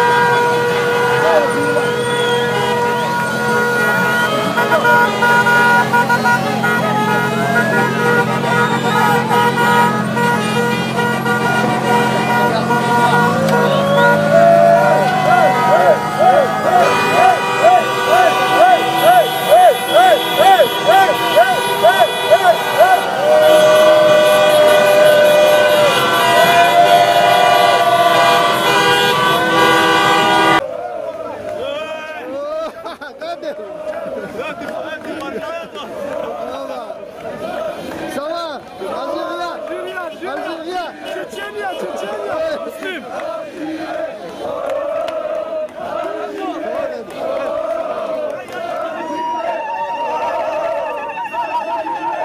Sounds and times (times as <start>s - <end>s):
Speech: 1.1s - 2.0s, 31.2s - 43.2s.